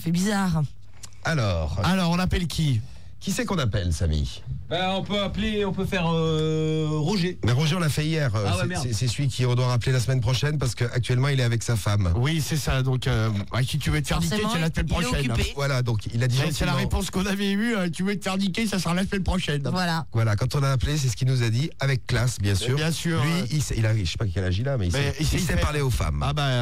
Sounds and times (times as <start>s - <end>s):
Speech: 0.0s - 26.6s.